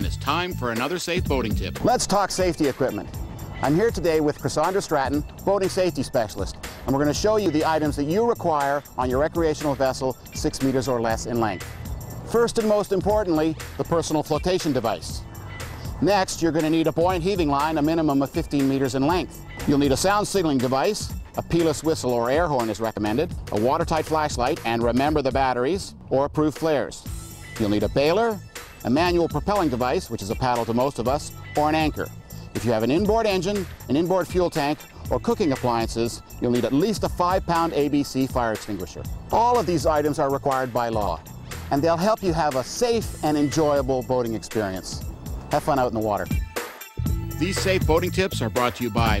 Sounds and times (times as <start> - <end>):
Speech: 0.0 - 11.6, 12.3 - 15.2, 16.0 - 46.4, 47.4 - 49.2
Music: 0.0 - 49.2.